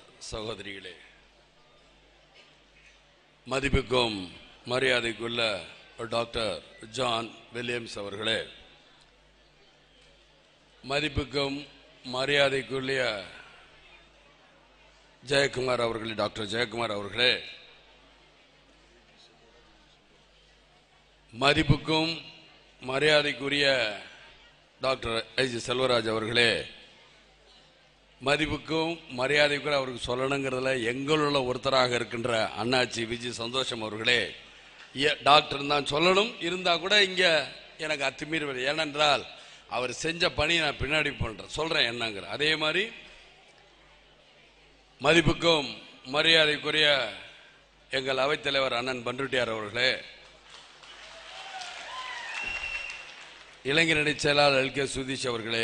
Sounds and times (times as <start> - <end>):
Male speech, man speaking: 0.0 - 1.2, 3.5 - 8.6, 10.8 - 13.6, 15.2 - 17.7, 21.4 - 24.2, 24.8 - 26.9, 28.2 - 34.4, 35.0 - 43.1, 45.0 - 50.2, 53.7 - 55.6
Narration, monologue: 0.0 - 1.5, 2.7 - 9.2, 10.6 - 13.9, 15.2 - 18.0, 21.0 - 27.0, 27.8 - 43.4, 45.0 - 50.5, 53.6 - 55.6.